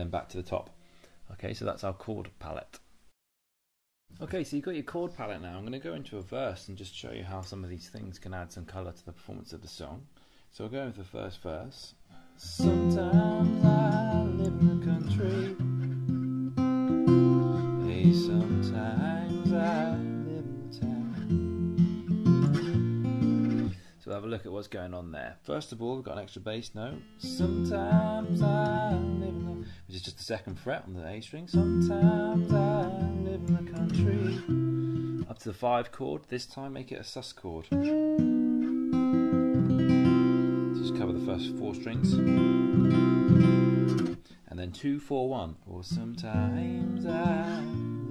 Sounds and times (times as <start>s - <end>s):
Speech: 0.0s - 0.7s, 1.3s - 2.9s, 4.2s - 12.7s, 24.0s - 27.5s, 29.9s - 31.7s, 35.2s - 37.8s, 40.8s - 42.2s, 44.5s - 46.8s
Acoustic guitar: 12.1s - 24.0s, 26.9s - 29.9s, 31.5s - 35.5s, 37.7s - 44.8s, 45.8s - 48.1s.